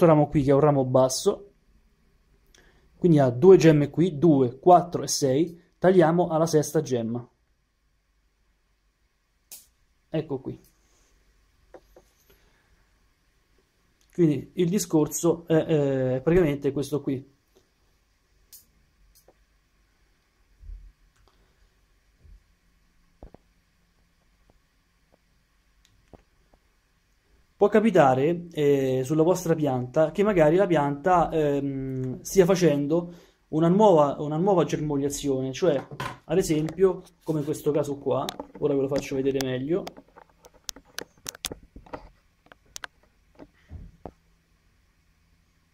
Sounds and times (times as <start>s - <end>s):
Speech: 0.0s - 1.5s, 3.0s - 7.3s, 10.1s - 10.7s, 14.1s - 17.3s, 27.6s - 40.0s.